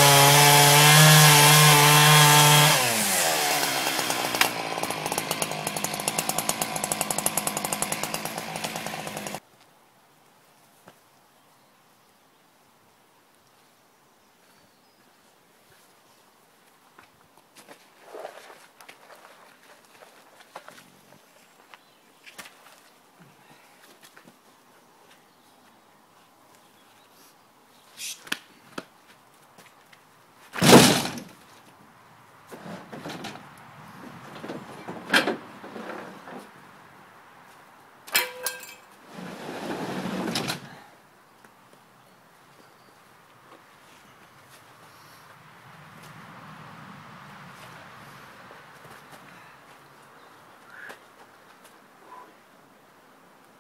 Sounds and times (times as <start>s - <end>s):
Wood: 30.6s - 31.4s, 34.3s - 36.5s.